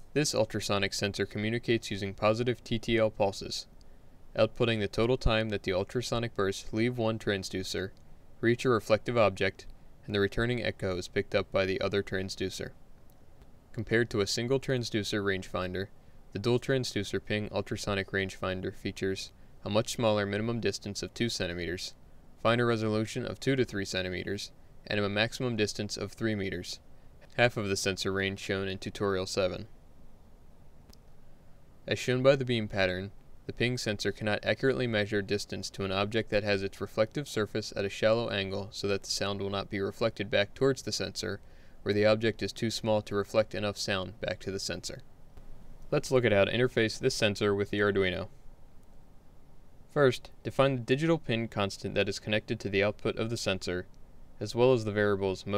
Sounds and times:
Speech: 0:00.1 - 0:03.7, 0:04.3 - 0:12.8, 0:13.7 - 0:29.7, 0:31.8 - 0:45.0, 0:45.9 - 0:48.3, 0:49.9 - 0:55.5.

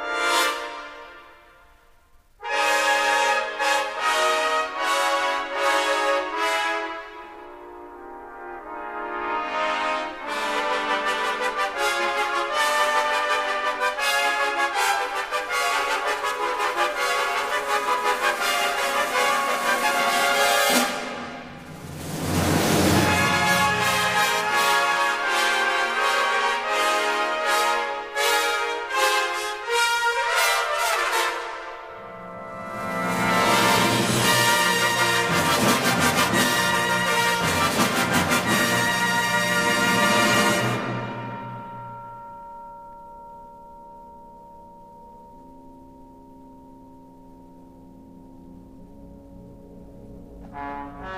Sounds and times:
Music: 0:00.0 - 0:51.1.

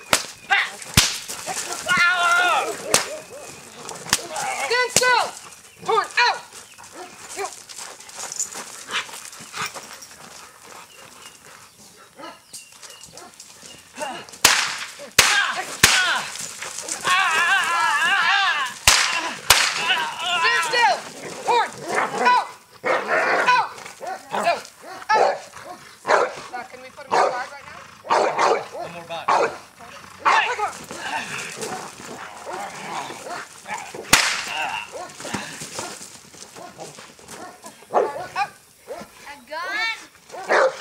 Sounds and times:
Bow-wow: 0:21.5 - 0:26.4, 0:27.1 - 0:30.6, 0:36.6 - 0:39.1, 0:40.3 - 0:40.8.

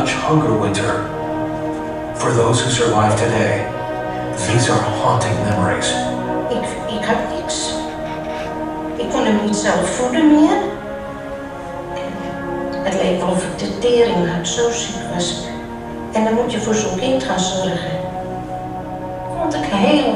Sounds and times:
Speech: 0:00.0 - 0:01.1, 0:02.2 - 0:03.7, 0:04.4 - 0:10.8, 0:12.8 - 0:15.5, 0:16.2 - 0:18.1, 0:19.4 - 0:20.1.

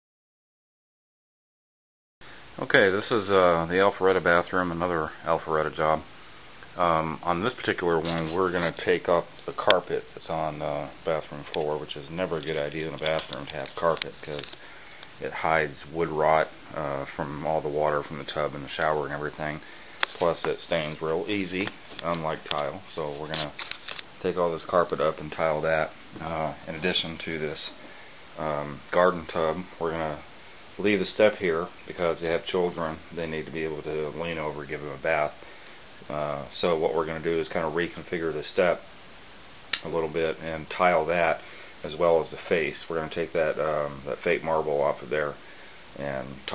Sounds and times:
Speech: 0:02.6 - 0:06.1, 0:06.8 - 0:14.6, 0:15.2 - 0:23.6, 0:24.2 - 0:27.8, 0:28.4 - 0:35.4, 0:36.0 - 0:38.9, 0:39.8 - 0:45.4, 0:46.0 - 0:46.5.

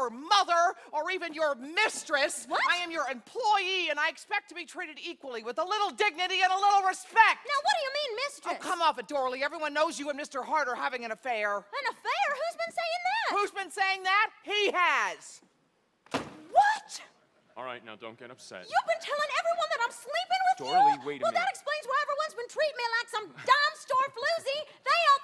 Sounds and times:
Speech: 0:20.4 - 0:22.0.

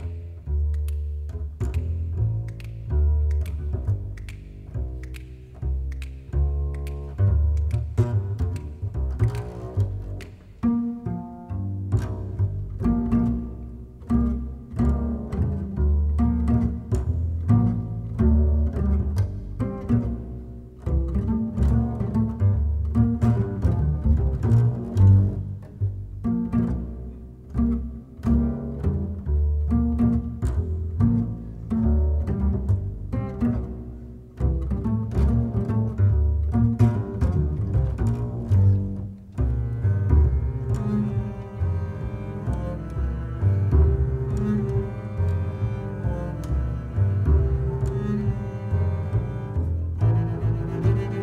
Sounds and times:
Double bass: 0:00.0 - 0:51.2.

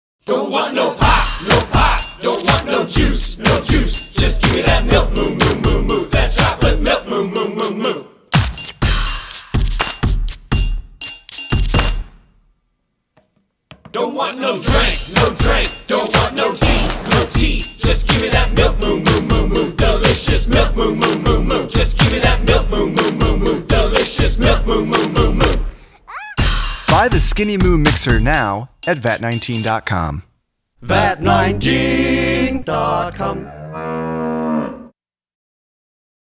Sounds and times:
Music: 0:00.6 - 0:12.4, 0:13.7 - 0:25.8, 0:26.4 - 0:29.9, 0:30.9 - 0:33.4
Speech: 0:26.9 - 0:30.3.

